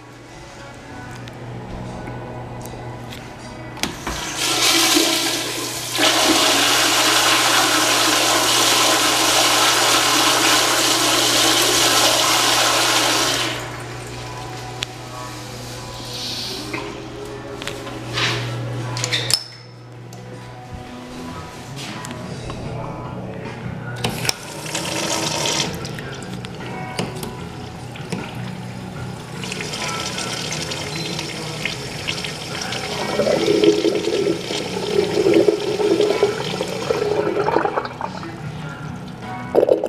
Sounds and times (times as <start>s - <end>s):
Toilet flush: 4.0s - 14.3s, 24.1s - 25.9s, 29.2s - 38.3s
Water: 29.3s - 39.8s.